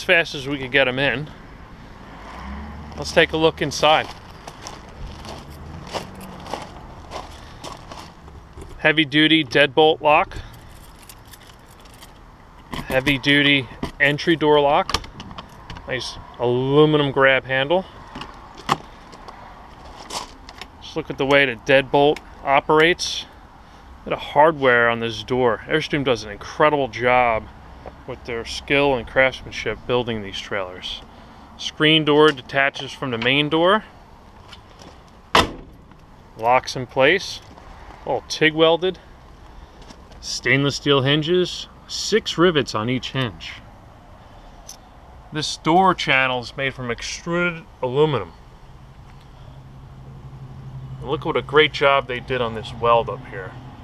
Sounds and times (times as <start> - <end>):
Speech: 0.0 - 1.3, 3.0 - 4.1, 8.8 - 10.4, 12.8 - 14.9, 15.9 - 17.9, 20.8 - 23.3, 24.1 - 27.5, 28.1 - 31.0, 31.6 - 33.9, 36.4 - 37.5, 38.1 - 39.0, 40.2 - 43.6, 45.3 - 48.4, 51.0 - 53.6
Walk, footsteps: 4.0 - 8.4.